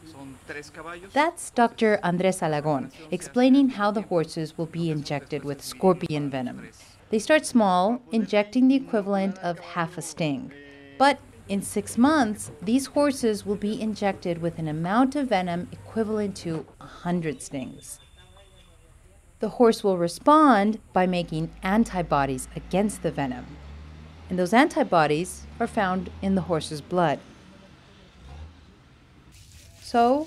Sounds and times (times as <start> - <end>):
Speech: 0.0 - 18.0, 19.4 - 23.5, 24.3 - 27.2, 29.8 - 30.2.